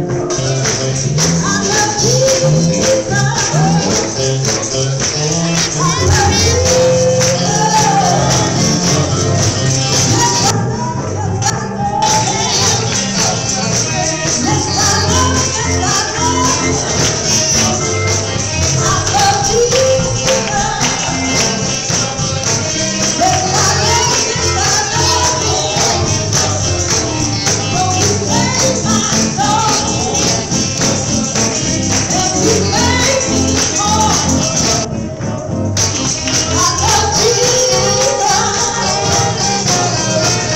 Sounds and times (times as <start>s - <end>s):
Music: 0.0s - 40.5s
Female singing: 1.4s - 4.1s, 5.6s - 9.1s, 9.8s - 17.7s, 18.6s - 31.0s, 31.6s - 34.9s, 36.3s - 40.5s.